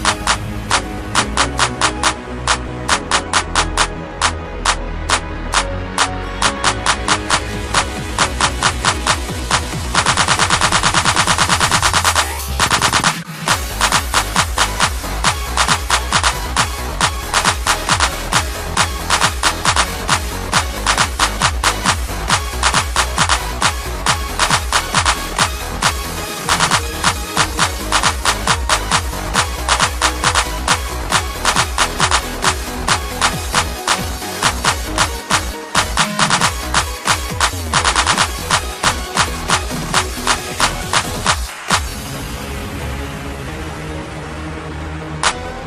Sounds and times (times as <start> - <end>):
Music: 0.0 - 45.6.